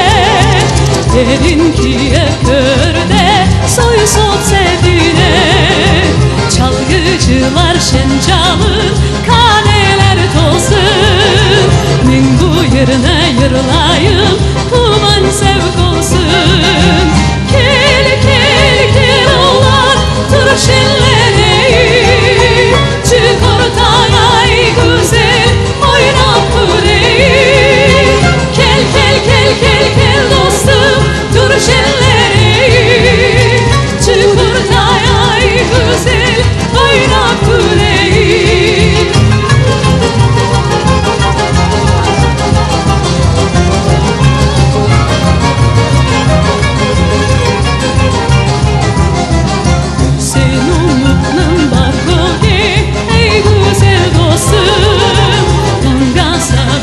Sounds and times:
Happy music: 0:00.0 - 0:56.8
Traditional music: 0:00.0 - 0:56.8.

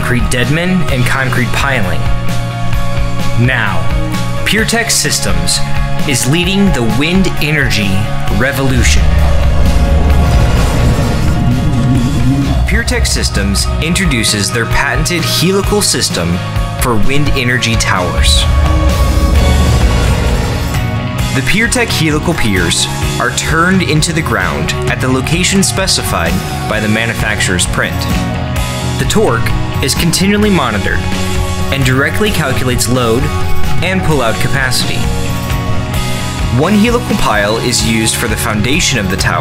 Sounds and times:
Speech: 0:00.0 - 0:02.1, 0:03.4 - 0:09.1, 0:12.6 - 0:18.5, 0:21.4 - 0:28.2, 0:29.0 - 0:31.1, 0:31.7 - 0:35.1, 0:36.5 - 0:39.4
Music: 0:00.0 - 0:39.4.

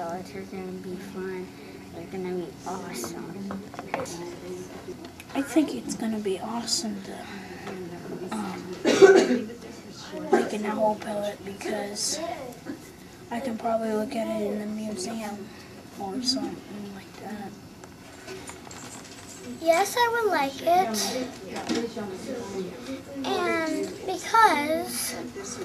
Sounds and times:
Speech: 0:00.0 - 0:12.6, 0:13.3 - 0:17.6, 0:19.6 - 0:25.6.

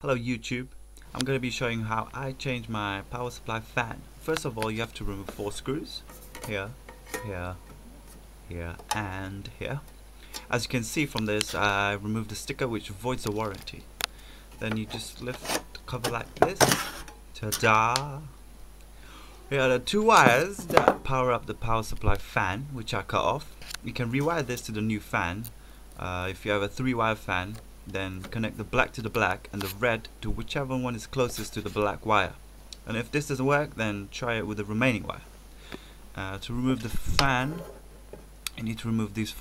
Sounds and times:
Speech: 0:00.0 - 0:07.6, 0:08.5 - 0:09.9, 0:10.5 - 0:13.9, 0:14.6 - 0:16.8, 0:17.4 - 0:18.3, 0:19.5 - 0:35.3, 0:36.2 - 0:37.8, 0:38.5 - 0:39.4
Inside, small room: 0:00.0 - 0:39.4.

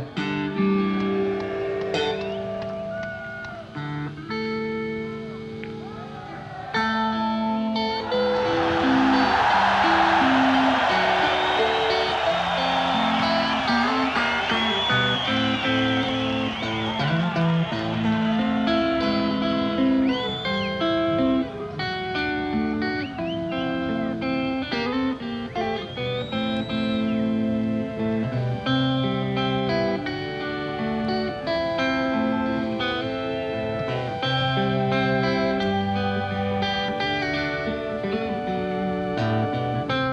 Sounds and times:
Music: 0:00.0 - 0:40.1.

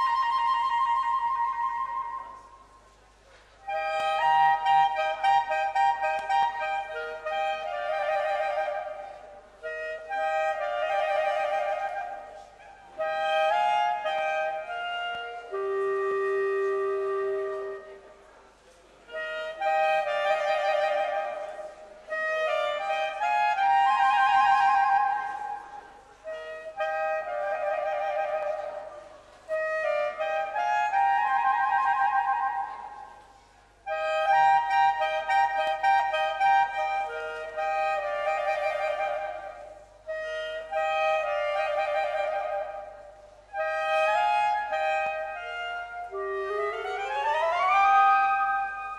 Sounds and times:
Clarinet: 0:00.0 - 0:48.9.

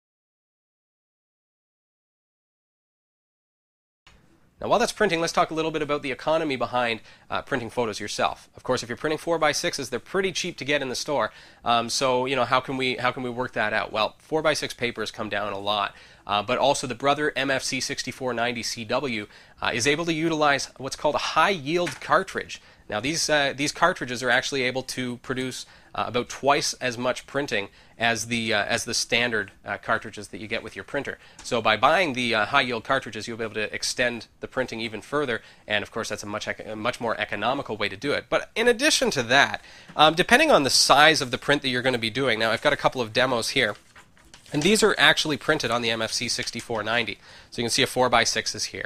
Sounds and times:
Speech: 0:04.6 - 0:43.8, 0:44.5 - 0:48.8.

